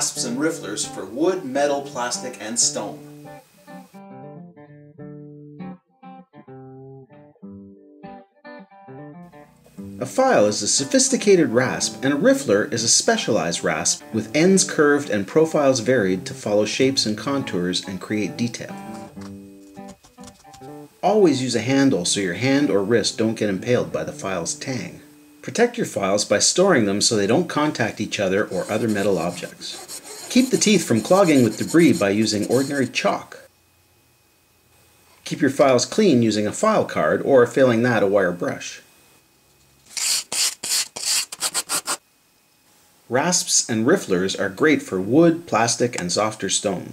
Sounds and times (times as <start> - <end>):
Speech: 0.0 - 3.0, 10.0 - 18.8, 21.0 - 33.5, 35.2 - 38.9, 43.1 - 46.9
Filing (rasp): 28.5 - 33.0, 39.9 - 42.0.